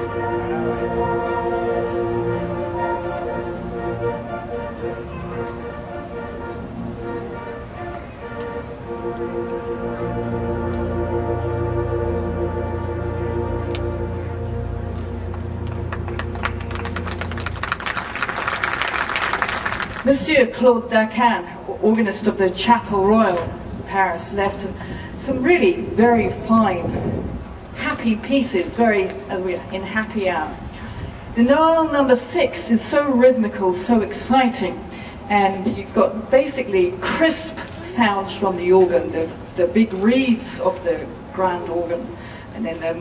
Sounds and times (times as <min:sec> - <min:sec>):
Speech: 0:20.1 - 0:27.0, 0:27.8 - 0:30.6, 0:31.4 - 0:43.0.